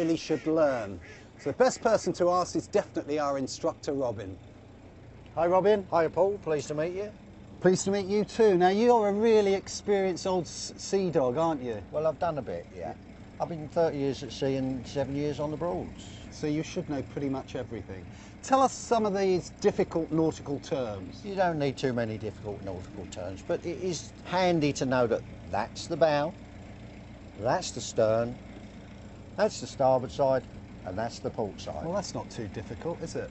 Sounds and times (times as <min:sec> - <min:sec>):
Speech: 0:00.0 - 0:04.4, 0:05.4 - 0:26.4, 0:27.4 - 0:28.4, 0:29.4 - 0:33.3
Vehicle: 0:00.0 - 0:33.3.